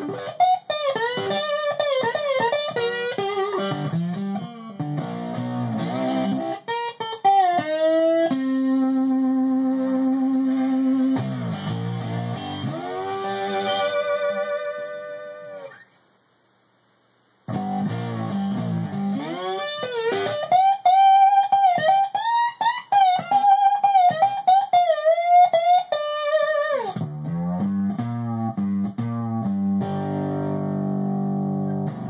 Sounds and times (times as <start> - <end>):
Electric guitar: 0.0 - 16.0, 17.5 - 32.1
Strum: 0.0 - 16.0, 17.5 - 32.1.